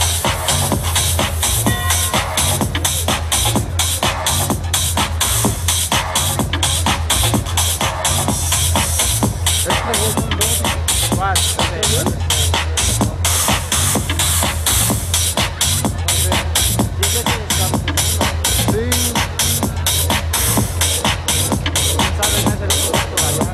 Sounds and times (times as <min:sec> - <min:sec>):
Music: 0:00.0 - 0:23.5
Speech: 0:09.6 - 0:13.4, 0:15.8 - 0:19.8, 0:21.8 - 0:23.5.